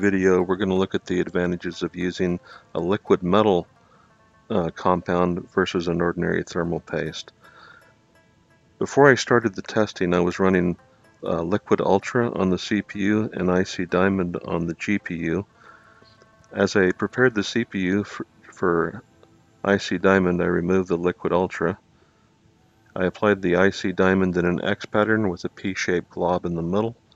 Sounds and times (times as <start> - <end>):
Speech: 0.0 - 3.7, 4.5 - 7.3, 8.8 - 15.5, 16.5 - 21.8, 23.0 - 27.0.